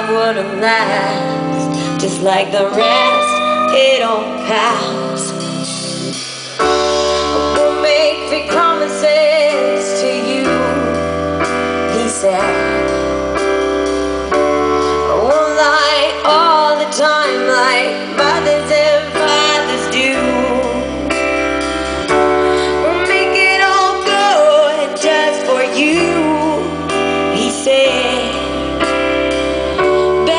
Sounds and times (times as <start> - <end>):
Music: 0.0 - 30.3.